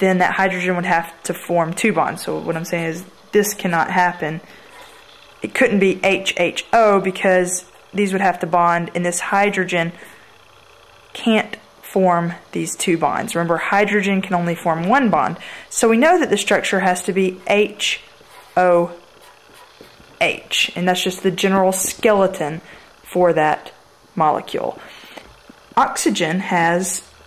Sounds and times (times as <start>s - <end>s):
Speech: 0.0s - 4.5s, 5.4s - 10.0s, 11.2s - 19.0s, 20.2s - 24.9s, 25.8s - 27.1s.